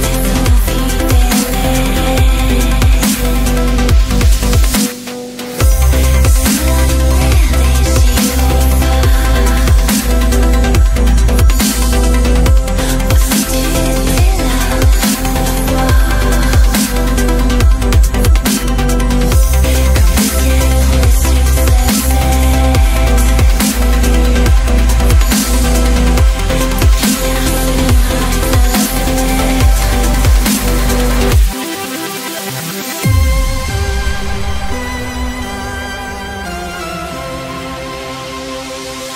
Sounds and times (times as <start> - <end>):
Exciting music: 0.0 - 39.1.